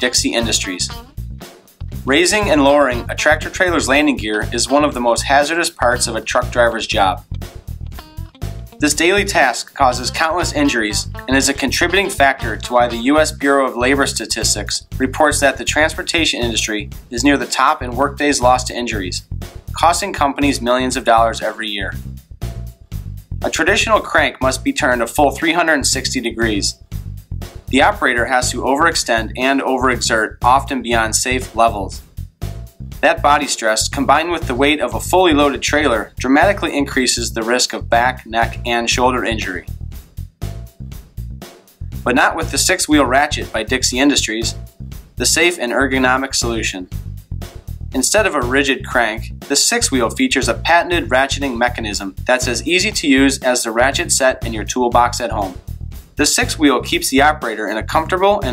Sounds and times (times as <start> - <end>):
Speech: 0.0 - 1.0, 2.1 - 7.2, 8.8 - 19.2, 19.8 - 22.0, 23.4 - 26.8, 27.7 - 32.0, 33.0 - 39.7, 42.1 - 44.6, 45.2 - 46.9, 48.0 - 55.6, 56.2 - 58.5
Music: 0.0 - 58.5.